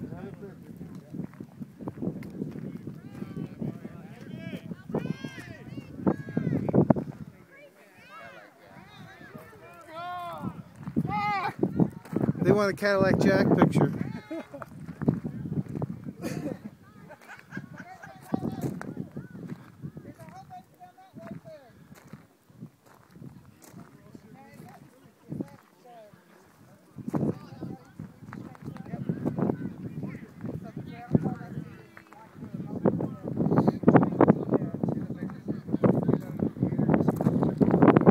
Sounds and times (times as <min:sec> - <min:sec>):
Speech: 0:17.8 - 0:22.0, 0:23.4 - 0:37.8.